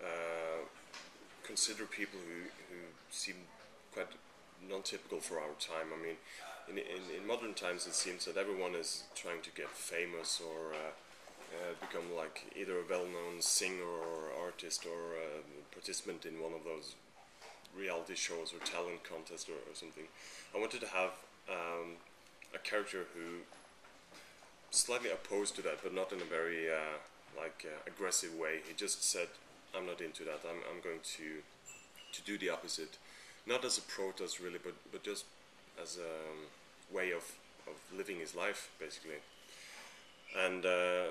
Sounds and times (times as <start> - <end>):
Speech: 0.0 - 0.8, 1.4 - 17.0, 17.7 - 23.5, 24.7 - 31.5, 32.1 - 39.2, 40.3 - 41.1.